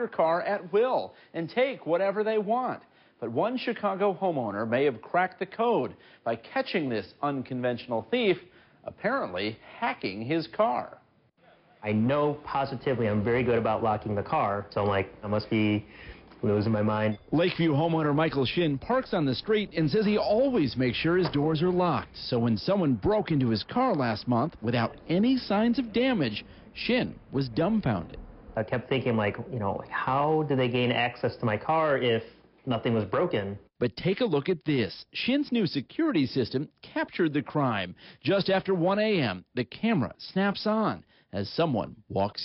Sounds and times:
Speech: 0.0 - 42.4.

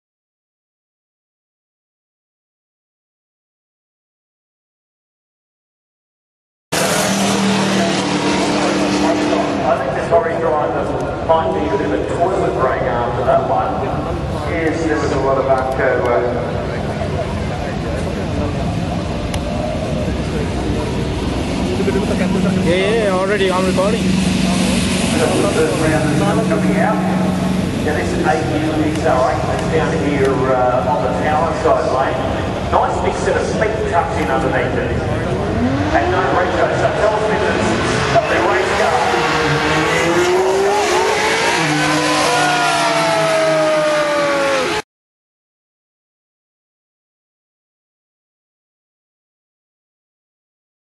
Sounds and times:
Car: 6.7 - 44.8
Speech: 7.6 - 41.2.

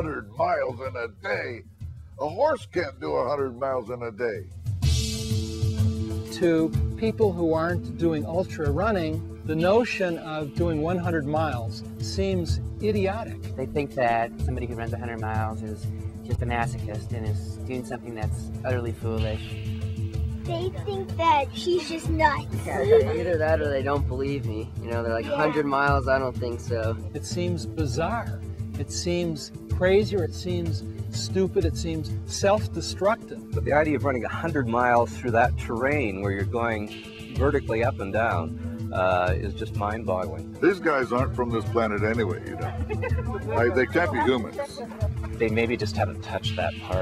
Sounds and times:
Speech: 0.0 - 1.6, 2.2 - 4.4, 22.6 - 42.8, 43.5 - 47.0
Music: 0.0 - 47.0.

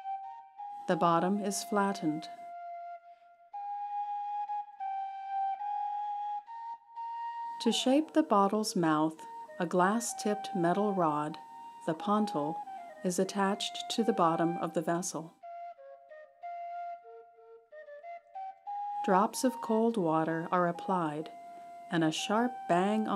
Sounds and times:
Flute: 0.0 - 23.1
Speech: 0.9 - 2.3, 7.6 - 15.3, 19.1 - 21.3, 21.9 - 23.1.

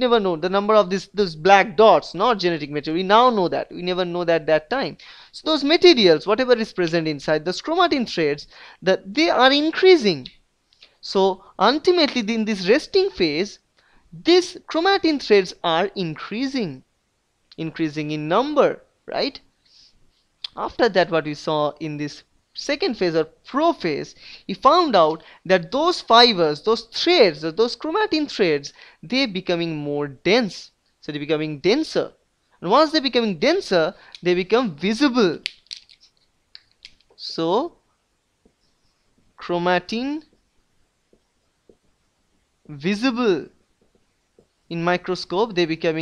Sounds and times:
Narration, monologue: 0.0 - 46.0.

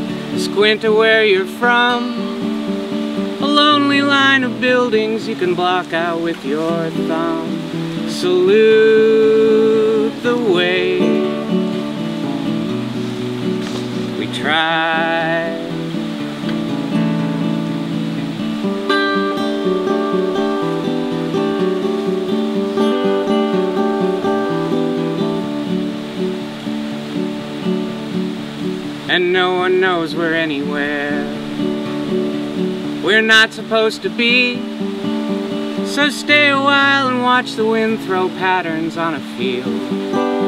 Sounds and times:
Music: 0.0 - 40.4.

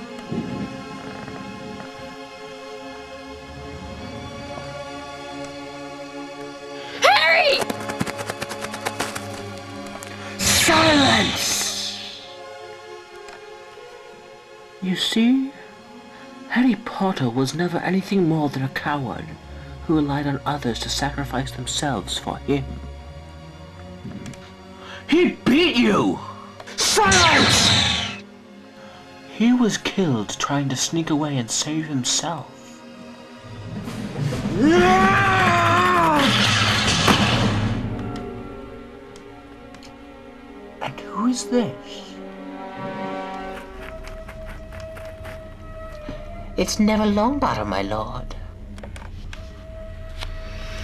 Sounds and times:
Music: 0.0 - 50.8
Speech: 16.5 - 22.8, 29.3 - 32.5, 40.8 - 42.2, 46.6 - 48.4.

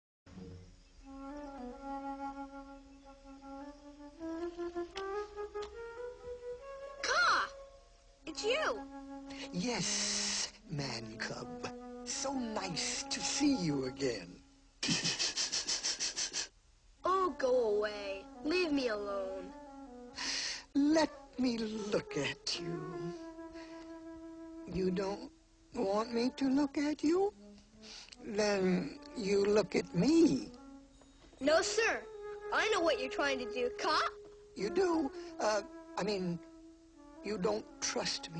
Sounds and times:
Wind instrument, woodwind instrument: 1.0 - 16.5, 17.2 - 38.3.

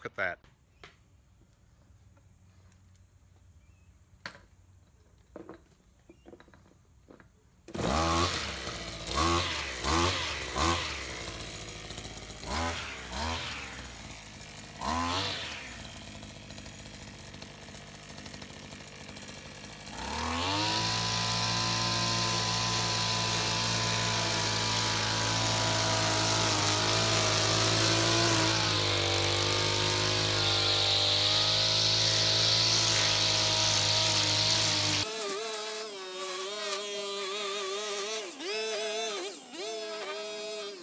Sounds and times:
Power tool: 5.4 - 40.8.

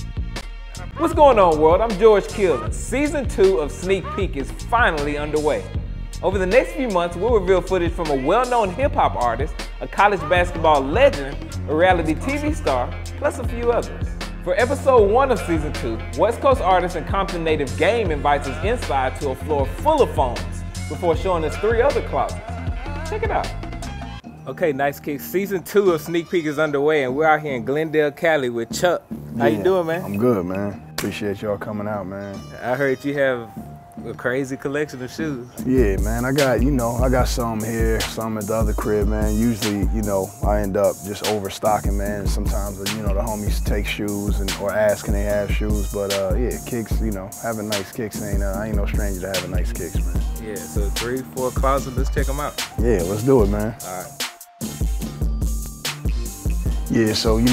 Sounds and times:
Music: 0.0 - 57.5
Speech: 1.0 - 13.9, 24.5 - 54.1, 56.9 - 57.5.

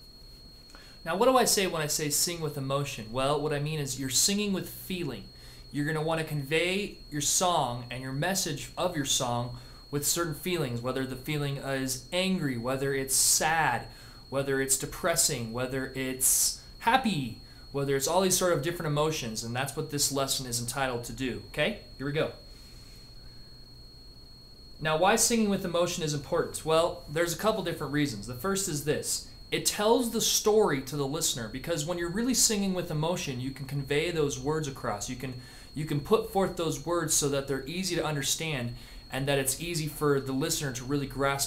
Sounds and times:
Speech: 1.1 - 22.4, 24.8 - 41.4.

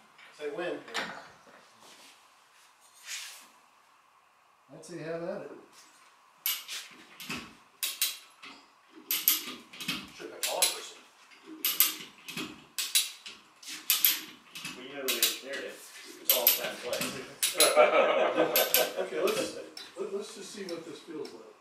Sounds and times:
Speech: 4.7 - 5.7, 10.2 - 11.0, 14.8 - 17.9, 19.0 - 21.6.

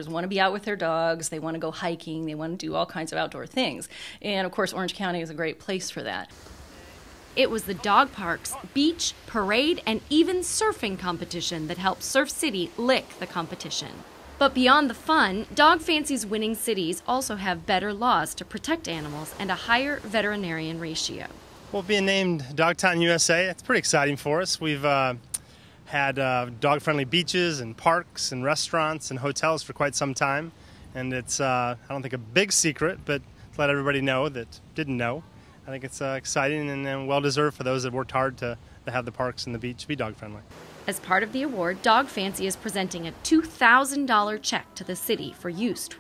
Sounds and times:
Speech: 7.4 - 25.2, 25.9 - 46.0.

